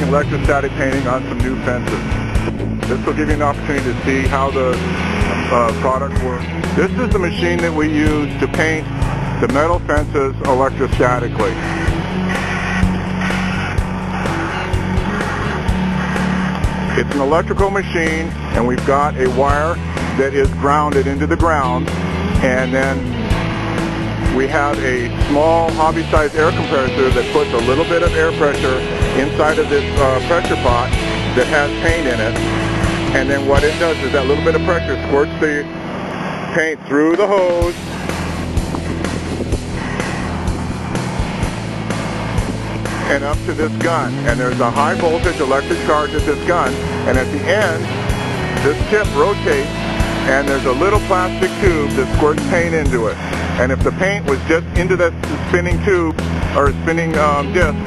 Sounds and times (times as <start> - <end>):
Speech: 0.0 - 2.0, 2.9 - 8.8, 9.4 - 11.6, 16.9 - 23.1, 24.3 - 32.4, 33.2 - 35.7, 36.5 - 37.8, 43.1 - 47.9, 48.6 - 49.7, 50.3 - 57.8
Music: 0.0 - 57.8.